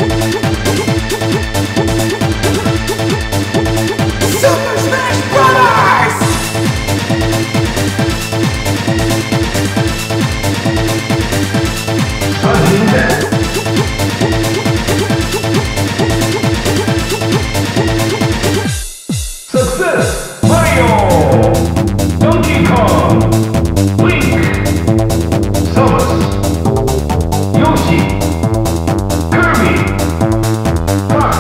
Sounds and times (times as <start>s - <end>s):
Techno: 0.0s - 31.4s.